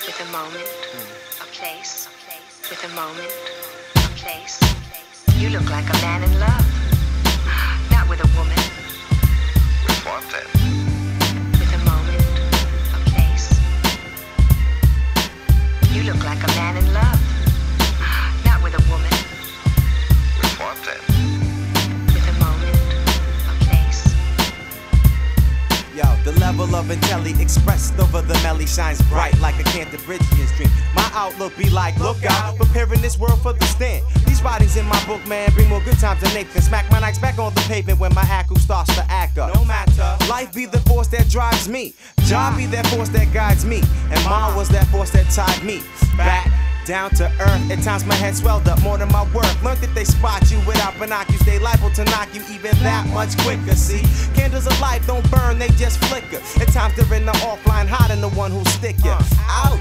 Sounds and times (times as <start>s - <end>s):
Music: 0.0s - 59.8s.